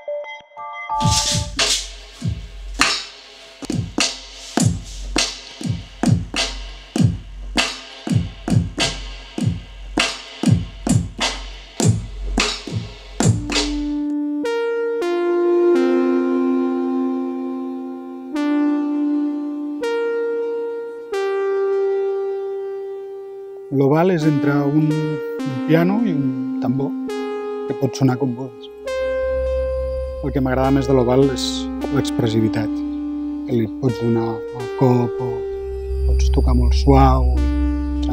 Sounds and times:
Music: 0.0 - 38.1
Speech: 23.7 - 27.0, 27.7 - 28.7, 30.2 - 32.8, 33.5 - 35.5, 36.1 - 38.1.

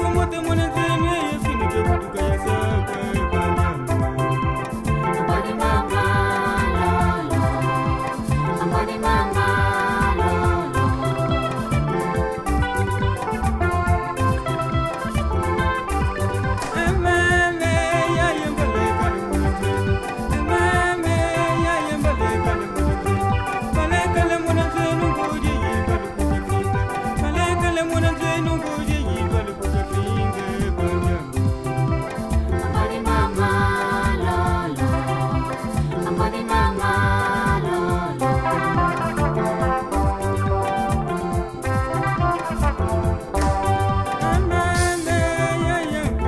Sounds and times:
Music: 0.0 - 46.2.

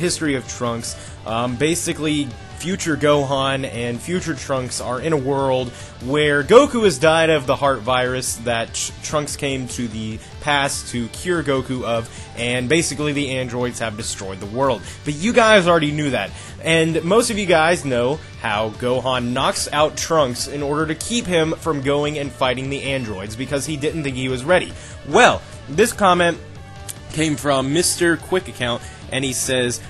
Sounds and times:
Speech: 0.0 - 26.4, 27.0 - 29.9
Music: 0.0 - 29.9.

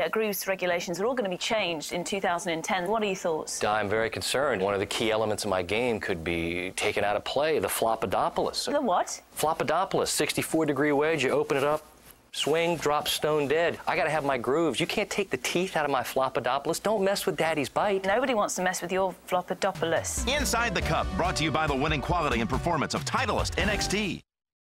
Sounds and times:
Speech: 12.4 - 24.3
Music: 20.0 - 24.3.

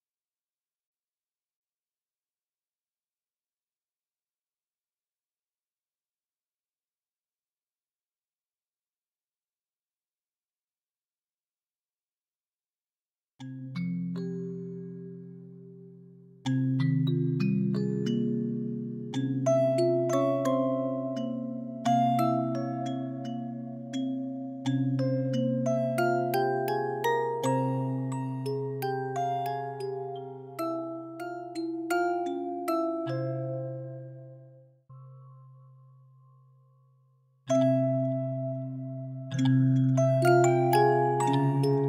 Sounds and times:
Music: 13.4 - 41.8.

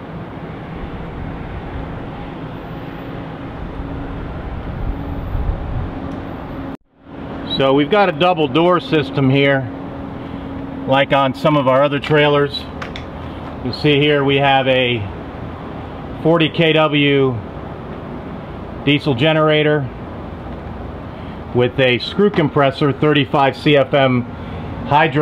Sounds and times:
Bus: 0.0 - 7.6, 9.6 - 10.9, 15.0 - 16.2, 17.3 - 18.8, 19.7 - 21.6, 24.2 - 25.0
Speech: 7.5 - 9.7, 10.9 - 12.7, 13.6 - 15.1, 16.2 - 17.4, 18.8 - 19.9, 21.5 - 24.3, 24.9 - 25.2.

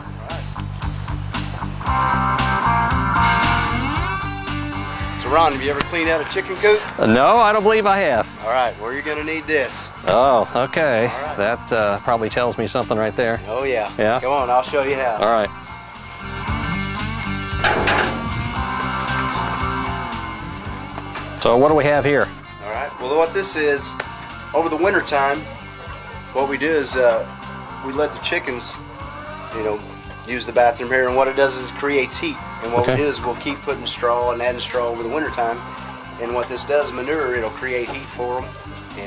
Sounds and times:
Music: 0.0 - 39.0
Speech: 5.2 - 15.5, 29.6 - 35.6, 36.2 - 39.0.

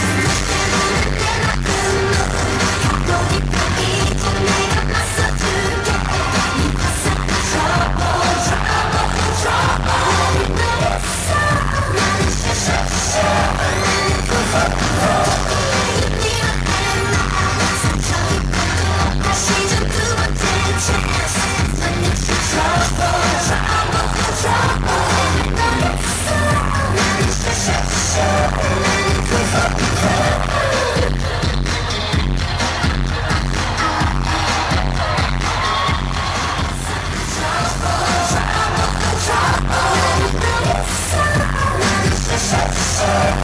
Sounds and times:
Music: 0.0 - 43.4.

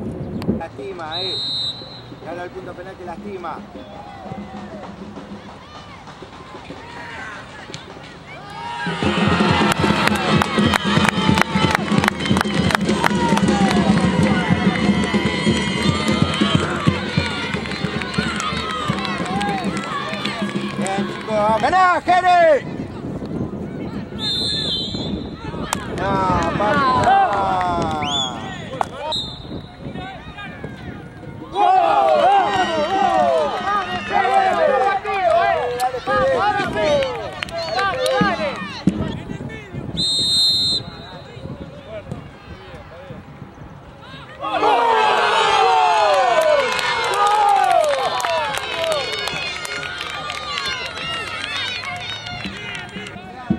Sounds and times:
Music: 3.1 - 21.6.

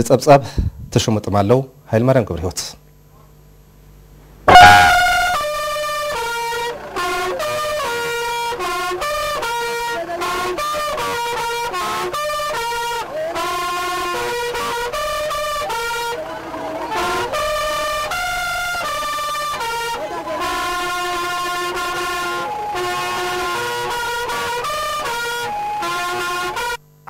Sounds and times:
Music: 4.5 - 26.8.

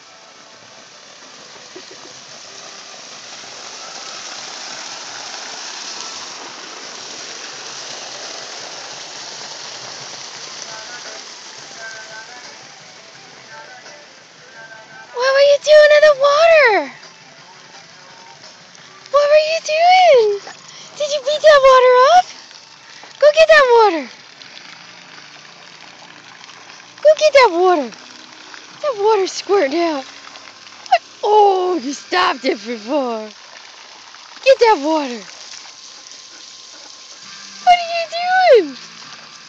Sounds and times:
Speech: 15.2 - 17.0, 19.1 - 22.3, 23.2 - 24.1, 27.0 - 27.9, 28.8 - 30.1, 30.9 - 33.3, 34.4 - 35.3, 37.6 - 38.8.

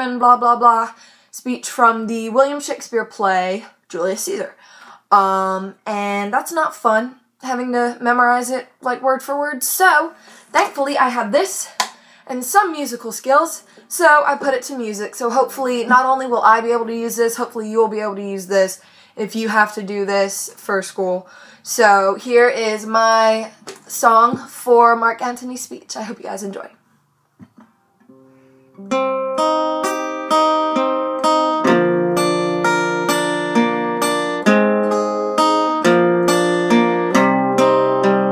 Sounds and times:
Female speech, woman speaking: 0.0 - 26.8
Music: 27.7 - 38.3.

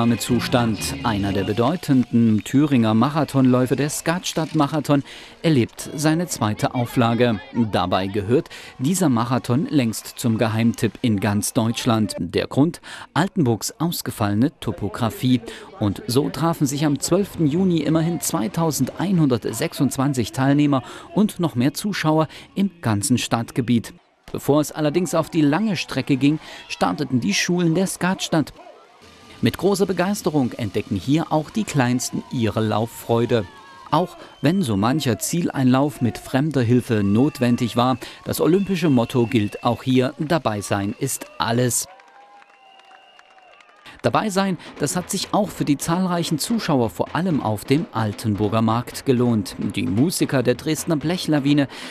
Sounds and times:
Speech: 0.0 - 28.6, 29.4 - 41.9, 44.0 - 51.7
Outside, urban or manmade: 26.0 - 37.4.

